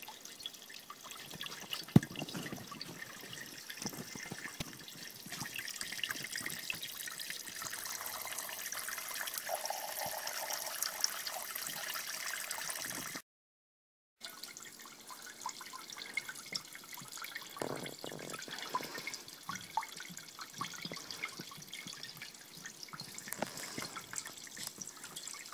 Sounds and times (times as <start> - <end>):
Stream: 0.0 - 13.2, 14.2 - 25.5.